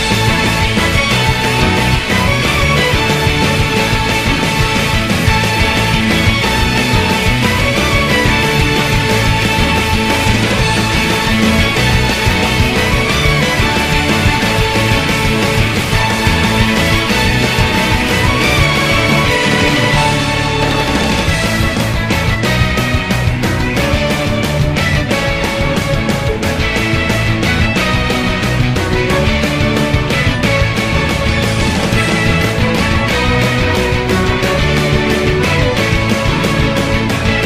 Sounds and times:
Music: 0.0 - 37.4.

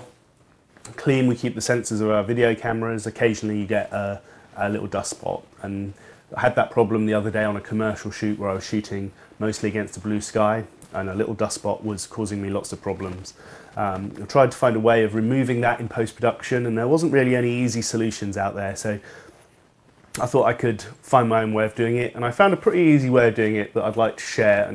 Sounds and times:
Speech: 0.8 - 19.1, 20.1 - 24.7.

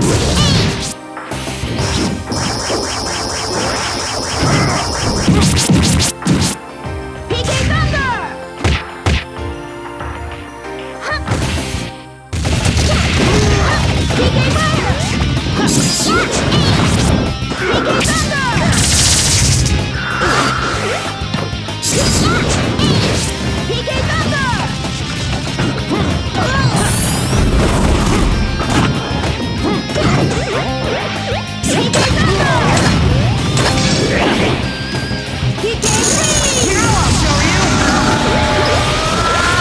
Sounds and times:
Music: 0.0 - 39.6
Smash, crash: 12.4 - 21.0.

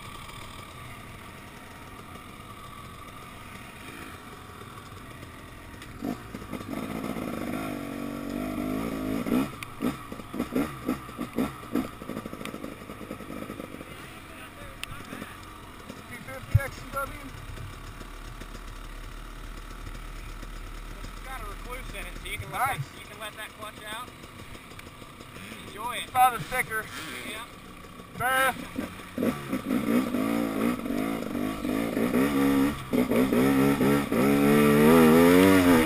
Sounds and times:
Speech: 16.1 - 17.3, 21.0 - 24.1, 25.4 - 27.5, 28.2 - 28.6.

